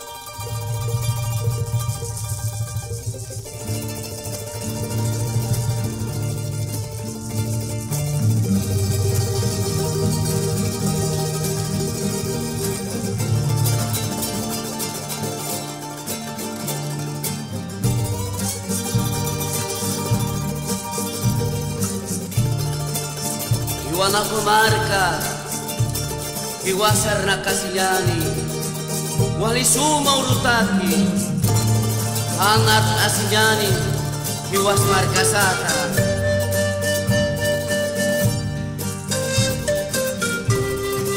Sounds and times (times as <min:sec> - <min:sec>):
Folk music: 0:00.0 - 0:41.1
Traditional music: 0:00.0 - 0:41.1.